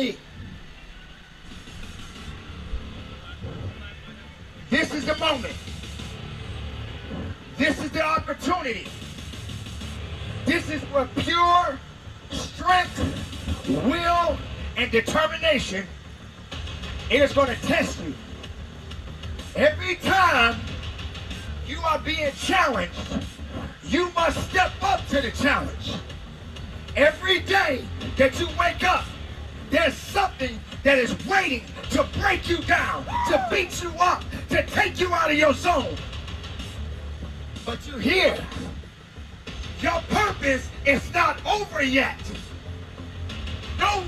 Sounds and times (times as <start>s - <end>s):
Male speech, man speaking: 0.0s - 0.2s, 3.2s - 5.6s, 7.6s - 8.9s, 10.5s - 15.9s, 17.1s - 18.2s, 19.6s - 20.6s, 21.6s - 23.2s, 23.8s - 26.0s, 27.0s - 29.1s, 29.7s - 36.0s, 37.7s - 38.6s, 39.8s - 42.4s, 43.8s - 44.0s
Music: 0.0s - 44.0s
Narration, monologue: 7.6s - 9.8s, 10.4s - 44.0s.